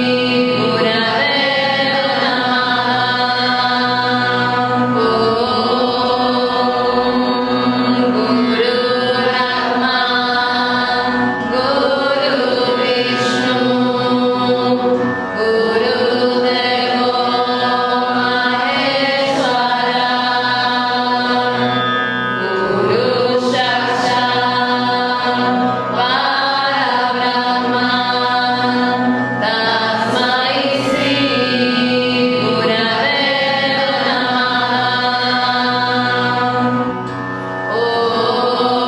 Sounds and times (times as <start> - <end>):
Mantra: 0.0 - 21.8, 22.4 - 36.9, 37.7 - 38.8.